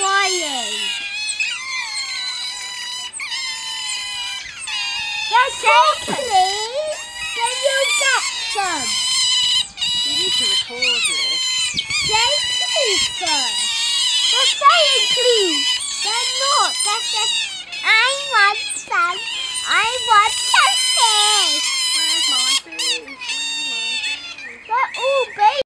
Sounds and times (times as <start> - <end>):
Speech: 0.0 - 0.9, 5.3 - 9.0, 10.1 - 11.4, 12.1 - 13.6, 14.4 - 25.6
Domestic animals, pets: 0.0 - 25.6.